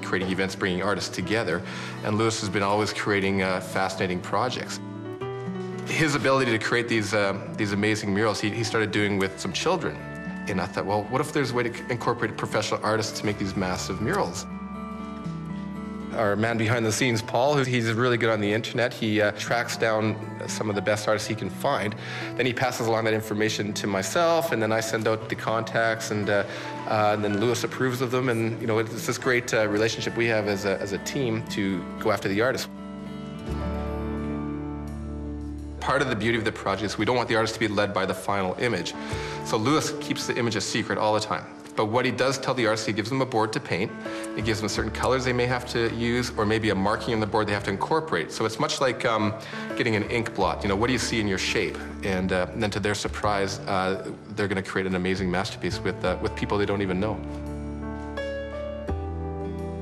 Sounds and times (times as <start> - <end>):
Speech: 0.0 - 4.8, 5.9 - 14.5, 16.1 - 32.7, 35.8 - 57.2
Music: 0.0 - 59.8.